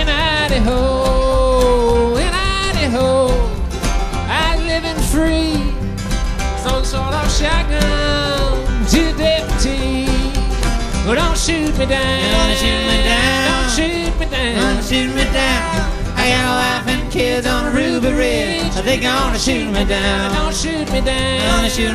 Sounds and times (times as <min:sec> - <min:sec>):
Music: 0:00.0 - 0:21.9.